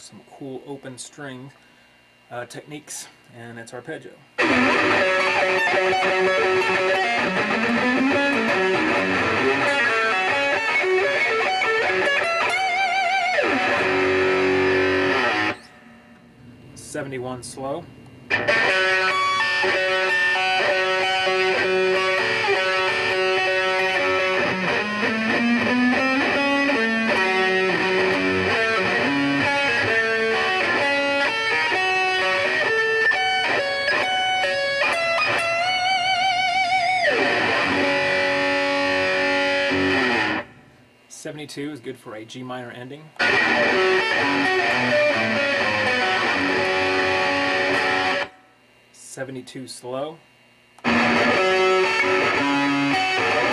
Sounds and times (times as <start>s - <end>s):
Guitar: 0.0s - 53.5s.